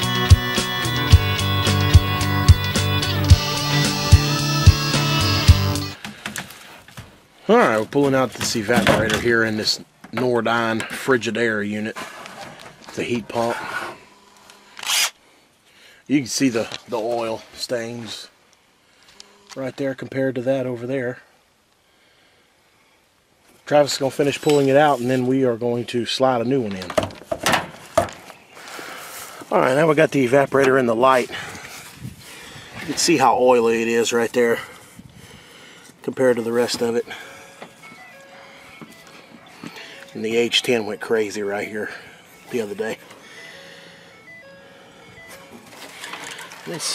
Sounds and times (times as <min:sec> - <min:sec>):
Speech: 0:07.5 - 0:12.0, 0:12.9 - 0:13.8, 0:16.1 - 0:18.4, 0:19.6 - 0:21.3, 0:23.7 - 0:27.0, 0:29.5 - 0:31.4, 0:32.9 - 0:34.7, 0:36.0 - 0:37.2, 0:40.2 - 0:43.0, 0:46.7 - 0:46.9.